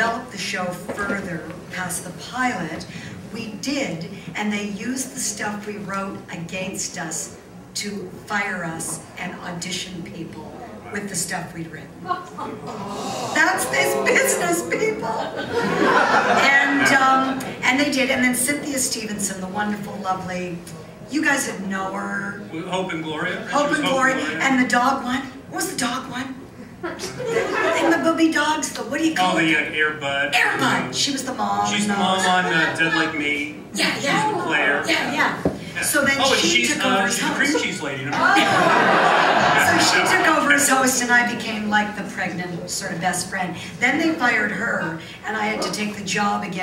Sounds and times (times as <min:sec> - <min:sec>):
Female speech, woman speaking: 0:00.0 - 0:12.6, 0:13.3 - 0:15.4, 0:16.2 - 0:22.4, 0:23.5 - 0:26.4, 0:27.4 - 0:29.6, 0:30.4 - 0:38.6, 0:39.6 - 0:46.6.